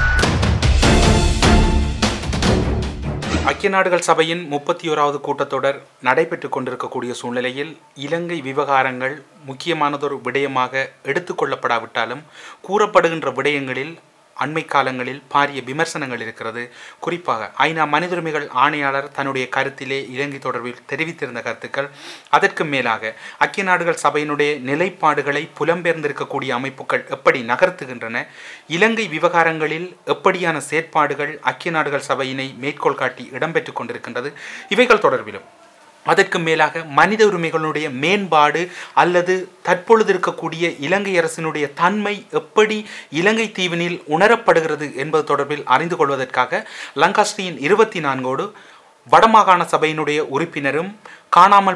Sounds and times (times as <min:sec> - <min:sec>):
Male speech, man speaking: 0:03.3 - 0:51.7.